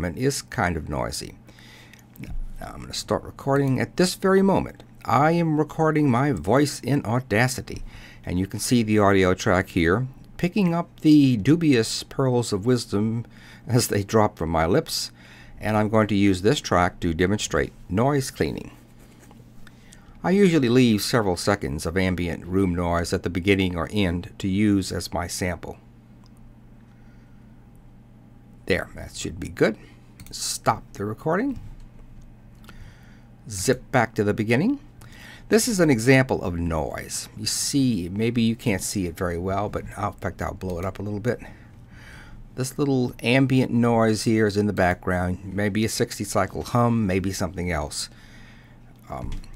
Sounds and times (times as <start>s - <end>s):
Speech: 0.0s - 1.4s, 2.2s - 18.8s, 20.2s - 25.8s, 28.7s - 31.7s, 33.5s - 34.9s, 35.5s - 41.6s, 42.6s - 48.2s, 49.0s - 49.5s.